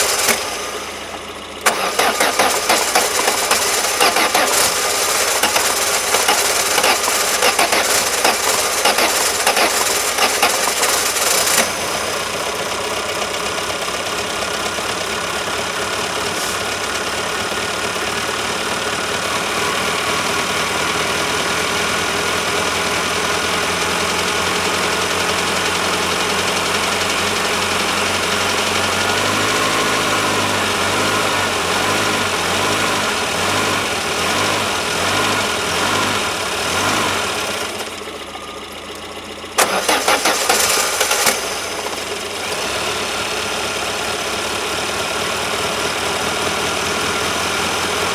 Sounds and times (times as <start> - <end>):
Car: 0.0 - 48.1
Engine: 0.0 - 48.1.